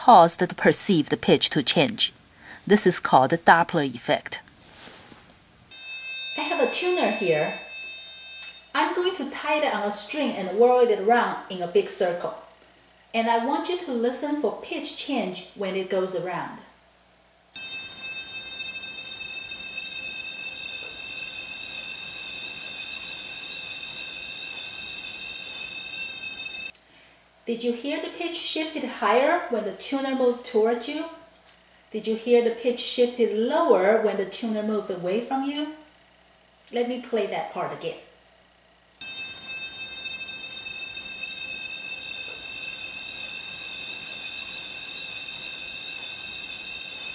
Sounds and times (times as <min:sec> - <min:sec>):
Speech: 0:00.0 - 0:04.4, 0:06.4 - 0:07.6, 0:08.8 - 0:12.5, 0:13.2 - 0:16.7, 0:27.5 - 0:31.2, 0:32.0 - 0:35.9, 0:36.7 - 0:38.1.